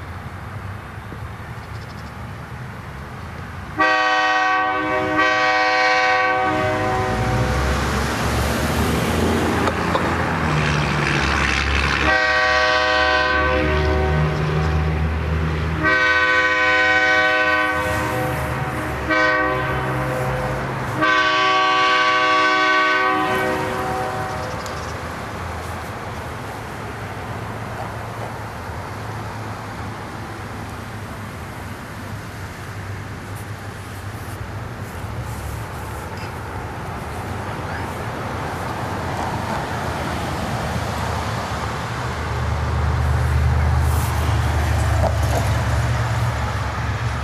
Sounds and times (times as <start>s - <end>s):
Train whistle: 3.8s - 7.6s, 12.0s - 14.6s, 15.8s - 24.6s.